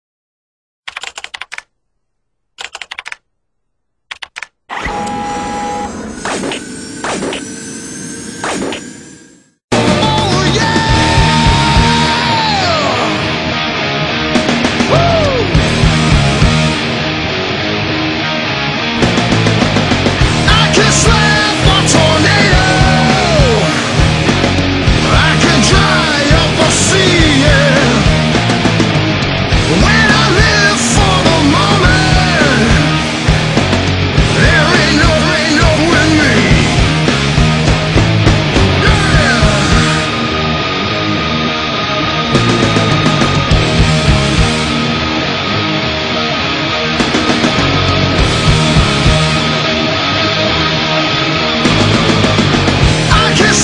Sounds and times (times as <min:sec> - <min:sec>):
Theme music: 0:05.0 - 0:53.6.